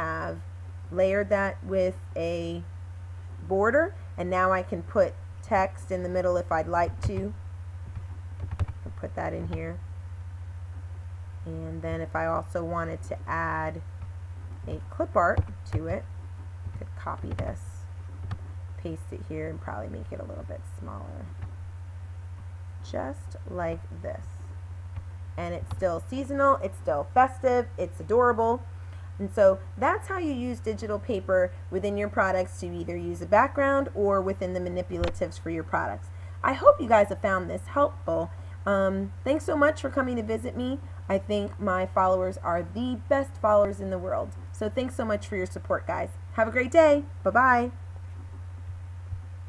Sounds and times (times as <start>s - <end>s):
Speech: 0.0s - 2.7s, 3.4s - 7.4s, 8.9s - 9.8s, 11.5s - 13.8s, 14.7s - 16.0s, 16.8s - 17.8s, 18.8s - 21.3s, 22.9s - 24.4s, 25.4s - 28.6s, 29.2s - 47.8s.